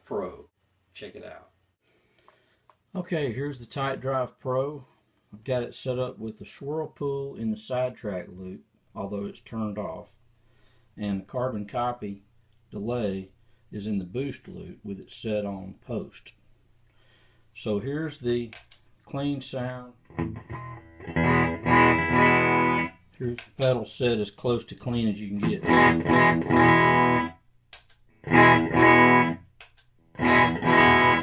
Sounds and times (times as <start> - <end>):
Speech: 0.0 - 1.6, 2.9 - 10.2, 11.0 - 16.4, 17.6 - 20.0, 23.2 - 25.8
Distortion: 0.0 - 31.2
Music: 20.1 - 22.9, 25.4 - 27.3, 28.3 - 29.4, 30.2 - 31.2.